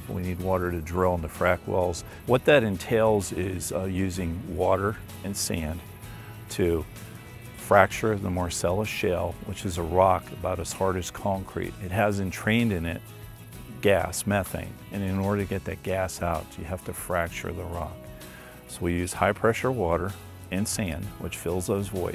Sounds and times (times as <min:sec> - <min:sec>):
Speech: 0:00.0 - 0:05.8, 0:06.5 - 0:06.9, 0:07.6 - 0:13.0, 0:13.7 - 0:18.0, 0:18.7 - 0:22.1
Music: 0:00.0 - 0:22.1.